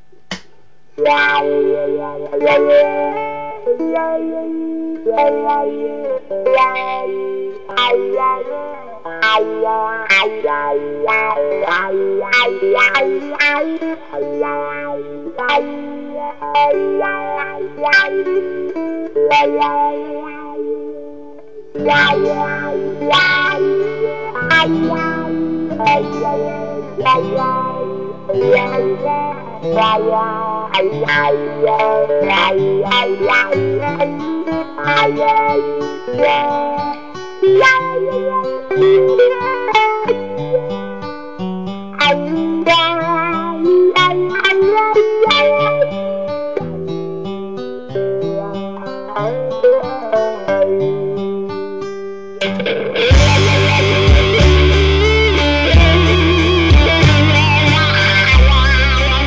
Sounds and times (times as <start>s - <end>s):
Guitar: 0.0s - 59.2s.